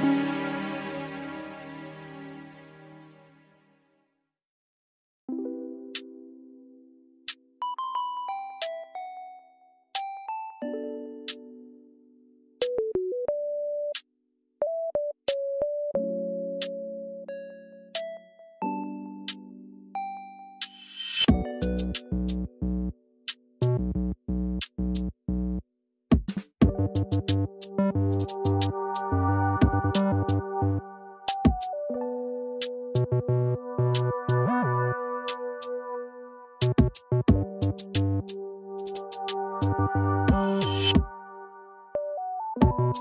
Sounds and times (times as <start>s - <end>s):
Music: 0.0s - 4.3s, 5.3s - 43.0s.